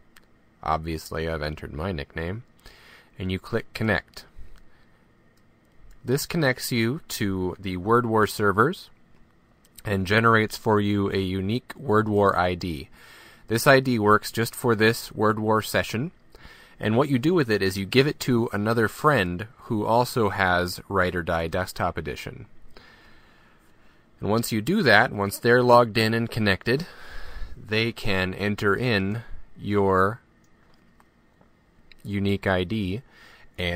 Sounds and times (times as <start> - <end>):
Speech: 0.6 - 2.5, 3.2 - 4.4, 6.0 - 9.0, 9.8 - 12.9, 13.5 - 16.2, 16.8 - 22.5, 24.2 - 27.0, 27.6 - 30.2, 32.0 - 33.7.